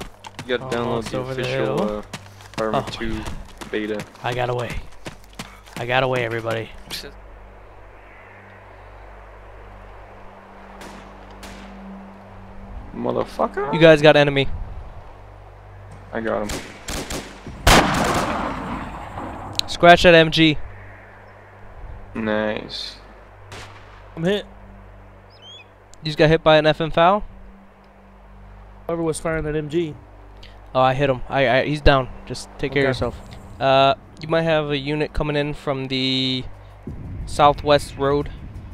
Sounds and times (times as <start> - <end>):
Speech: 0.4 - 4.8, 5.8 - 7.1, 13.0 - 14.5, 19.6 - 20.6, 22.2 - 23.0, 26.0 - 27.2, 28.9 - 30.0, 30.8 - 36.5, 37.3 - 38.4
Gunshot, gunfire: 16.5 - 19.0.